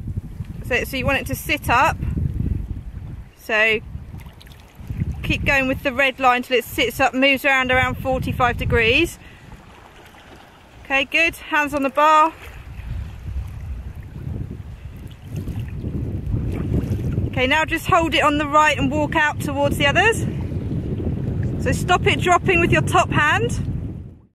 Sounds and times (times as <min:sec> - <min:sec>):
Speech: 0:00.6 - 0:02.0, 0:03.4 - 0:03.8, 0:05.3 - 0:09.2, 0:10.9 - 0:12.4, 0:17.4 - 0:20.3, 0:21.7 - 0:23.6.